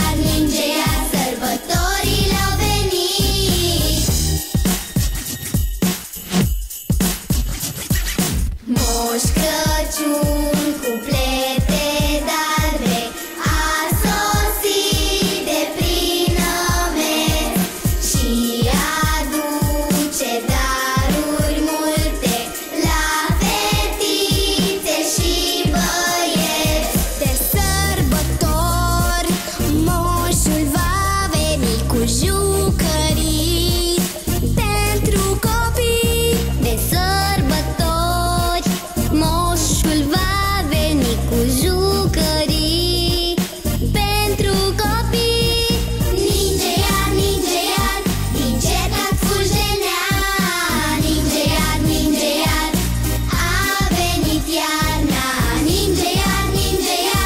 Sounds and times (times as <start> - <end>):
Christian music: 0.0 - 7.2, 8.6 - 57.2
Christmas music: 0.0 - 57.2
Pop music: 0.0 - 57.2.